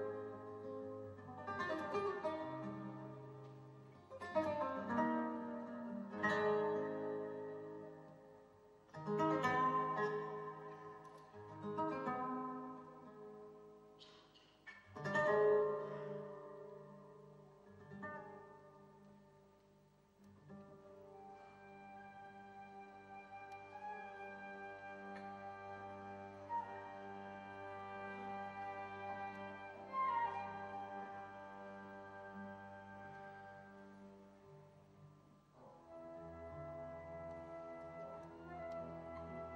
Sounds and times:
Guitar: 0:00.0 - 0:39.5.

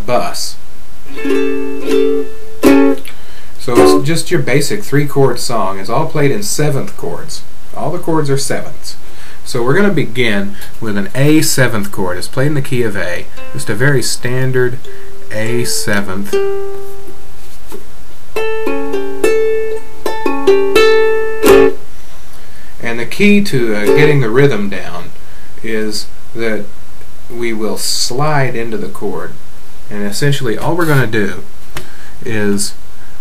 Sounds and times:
Speech: 0:00.0 - 0:00.6, 0:03.6 - 0:16.4, 0:22.8 - 0:26.7, 0:27.3 - 0:31.5, 0:32.2 - 0:32.8
Music: 0:01.2 - 0:03.0, 0:13.4 - 0:13.8, 0:15.0 - 0:17.2, 0:18.4 - 0:21.8.

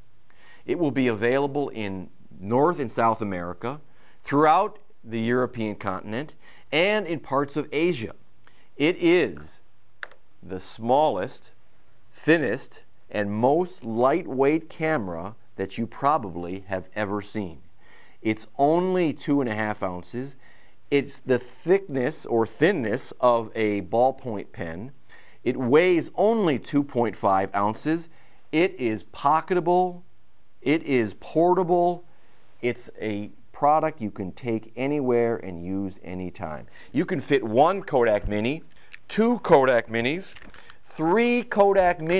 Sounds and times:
Speech: 0:00.7 - 0:08.2, 0:08.8 - 0:09.6, 0:10.4 - 0:17.6, 0:18.2 - 0:30.0, 0:30.6 - 0:32.0, 0:32.6 - 0:42.1.

